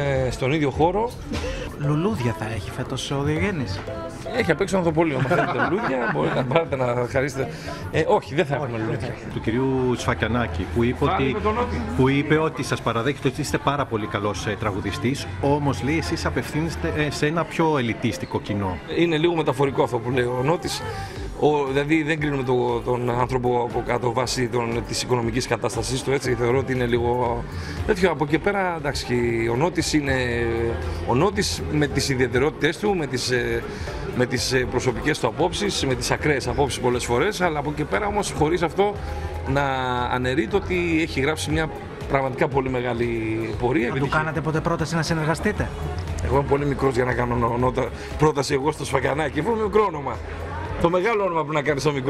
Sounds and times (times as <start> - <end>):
Music: 0.0 - 52.1
Speech: 1.8 - 52.1.